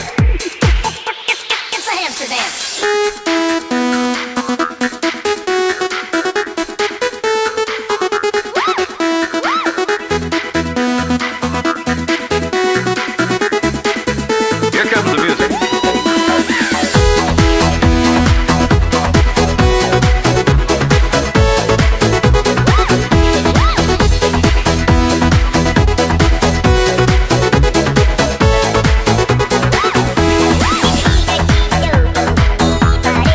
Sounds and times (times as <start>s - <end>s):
Trance music: 0.0s - 33.3s.